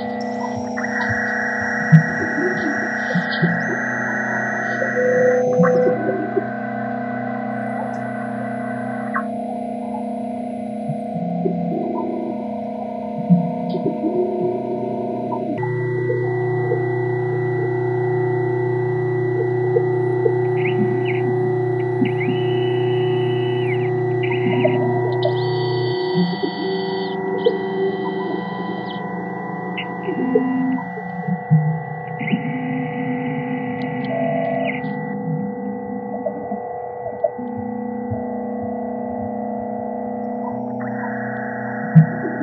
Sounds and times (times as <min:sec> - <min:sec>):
Hum: 0:00.0 - 0:42.4
Mains hum: 0:00.0 - 0:42.4.